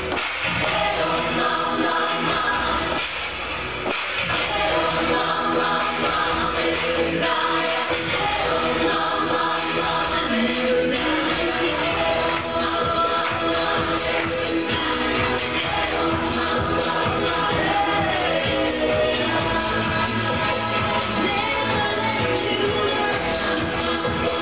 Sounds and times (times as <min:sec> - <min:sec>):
Music: 0:00.0 - 0:24.4.